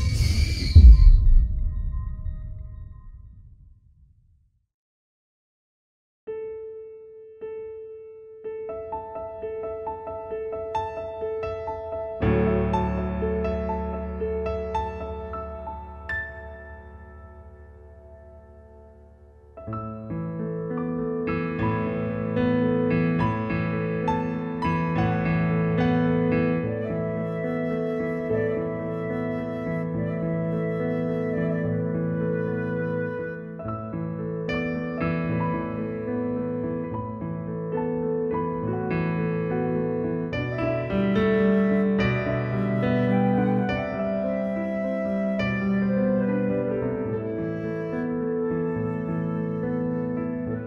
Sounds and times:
Music: 0.0s - 4.4s, 6.3s - 50.6s.

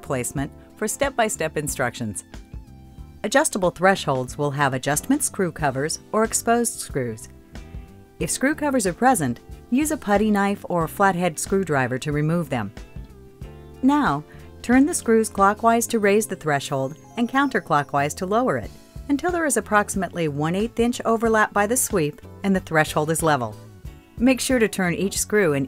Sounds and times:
Speech: 0.0s - 2.2s, 3.2s - 7.3s, 8.2s - 12.7s, 13.8s - 23.6s, 24.2s - 25.6s
Music: 0.0s - 25.6s.

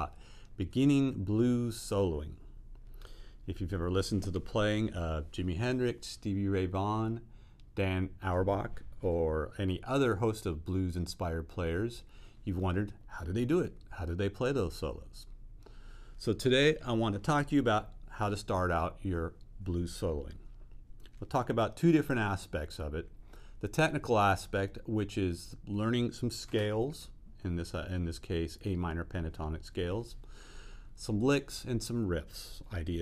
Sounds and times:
Speech: 0.0s - 2.5s, 3.5s - 15.4s, 16.2s - 20.5s, 21.1s - 30.2s, 31.0s - 33.0s.

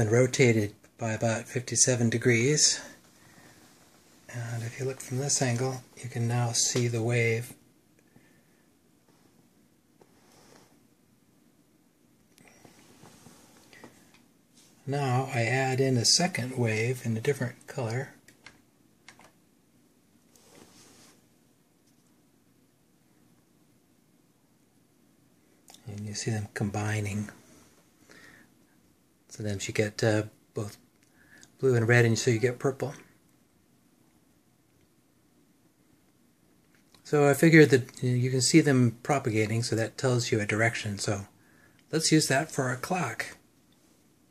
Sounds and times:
Speech: 0.0s - 3.0s, 4.3s - 7.6s, 14.8s - 18.2s, 25.7s - 27.4s, 29.3s - 30.8s, 31.5s - 33.2s, 37.0s - 43.4s.

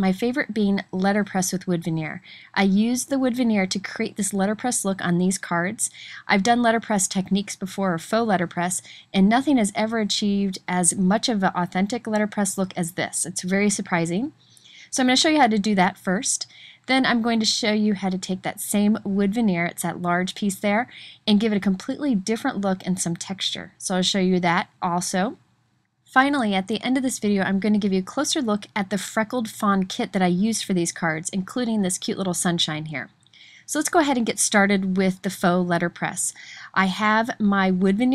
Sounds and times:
Speech: 0.0s - 25.4s, 26.1s - 38.1s.

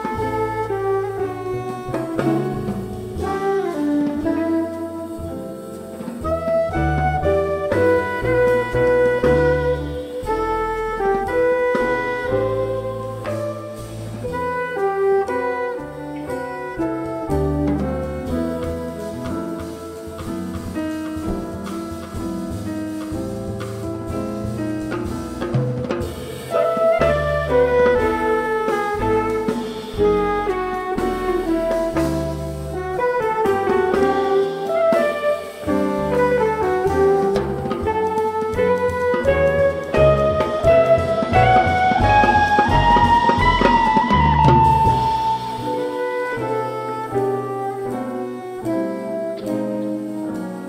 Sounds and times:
Drum: 0.0s - 50.6s.

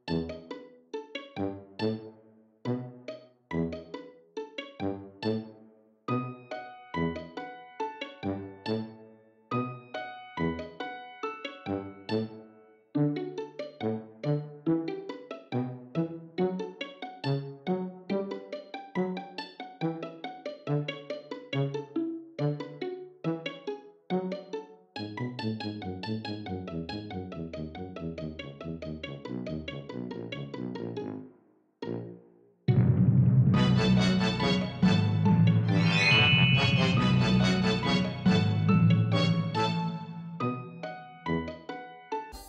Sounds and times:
Music: 0.0s - 42.4s.

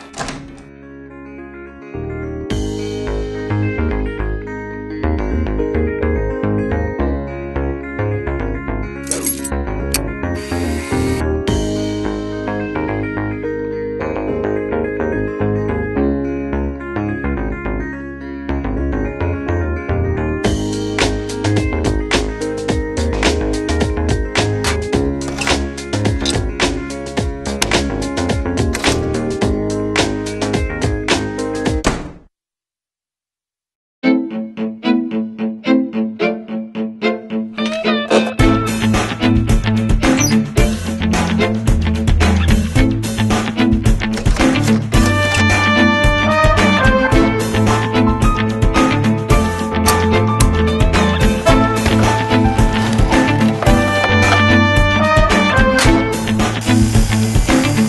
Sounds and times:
Music: 0.0s - 31.9s, 34.0s - 57.8s.

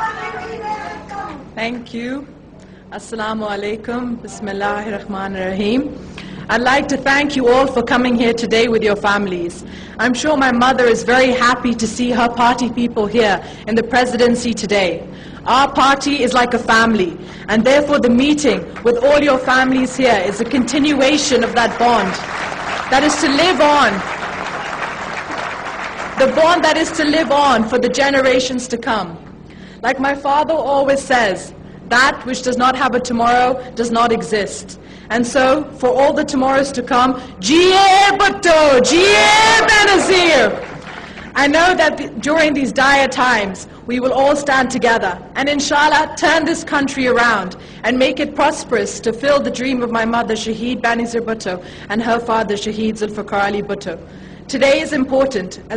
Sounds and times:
Female speech, woman speaking: 0.0s - 22.2s, 22.9s - 24.1s, 26.2s - 29.2s, 29.8s - 40.6s, 41.4s - 55.7s
Narration, monologue: 0.0s - 24.4s, 26.0s - 55.7s.

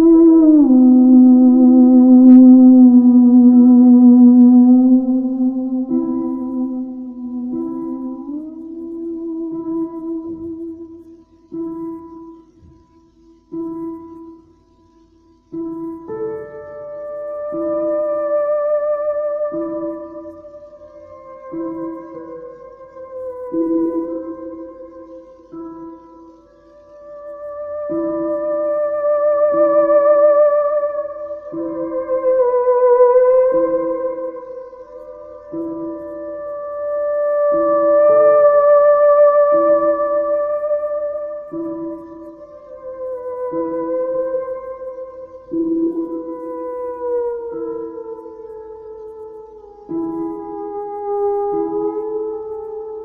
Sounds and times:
Theremin: 0.0s - 14.4s, 15.5s - 53.0s.

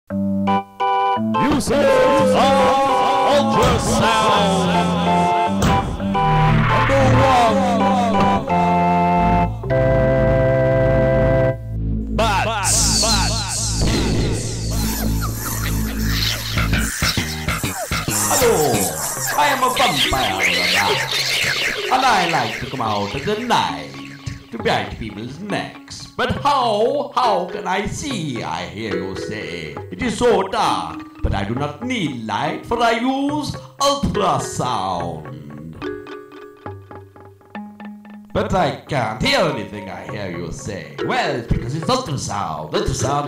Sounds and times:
Music: 0.1s - 43.2s
Speech: 1.4s - 5.3s, 6.8s - 8.4s, 12.2s - 13.9s, 18.3s - 21.1s, 21.9s - 35.6s, 38.3s - 43.2s.

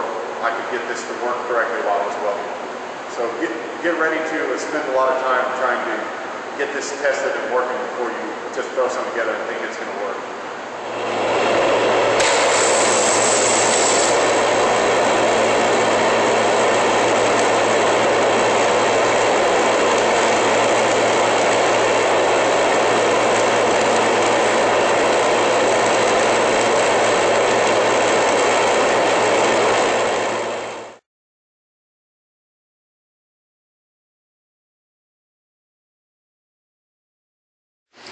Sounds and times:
Speech: 0.0s - 2.5s, 3.1s - 10.2s.

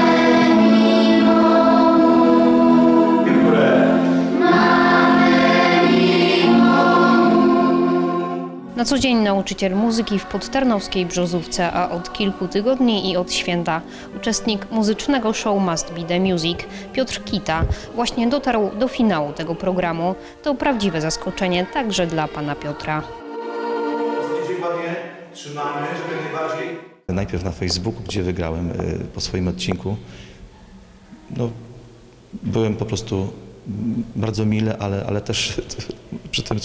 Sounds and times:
Music: 0.0s - 36.6s
Speech: 8.8s - 23.1s, 24.4s - 30.0s, 32.4s - 36.6s.

